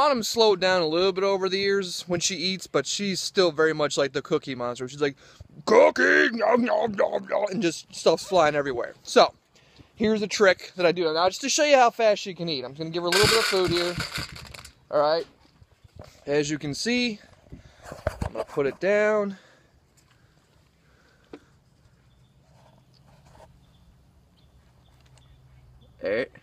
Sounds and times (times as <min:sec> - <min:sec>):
Speech: 0:00.0 - 0:09.4, 0:10.0 - 0:14.0, 0:14.9 - 0:15.3, 0:16.2 - 0:17.3, 0:18.3 - 0:19.4, 0:26.0 - 0:26.4.